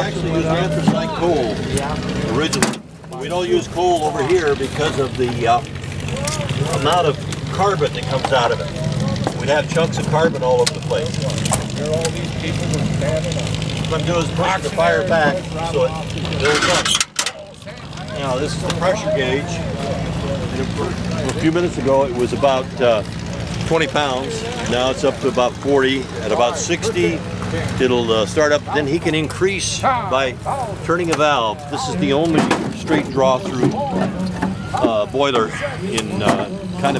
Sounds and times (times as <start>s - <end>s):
Speech: 0.0s - 36.9s
Truck: 0.0s - 36.9s.